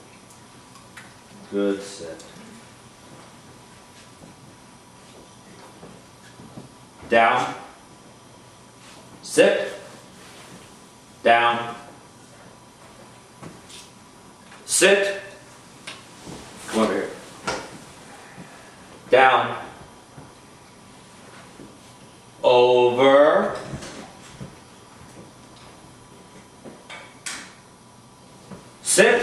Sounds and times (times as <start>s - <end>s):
Speech: 1.4s - 2.6s, 7.1s - 7.8s, 9.2s - 9.9s, 11.2s - 11.9s, 14.7s - 15.4s, 16.7s - 17.2s, 19.1s - 19.8s, 22.4s - 23.8s, 28.8s - 29.2s.